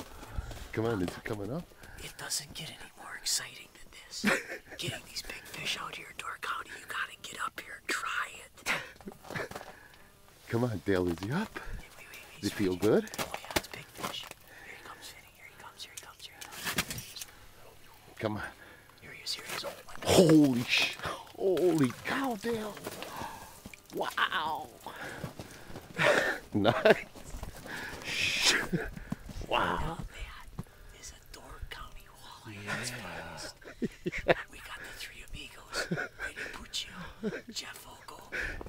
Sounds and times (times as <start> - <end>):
Speech: 12.4 - 13.2, 29.5 - 30.1.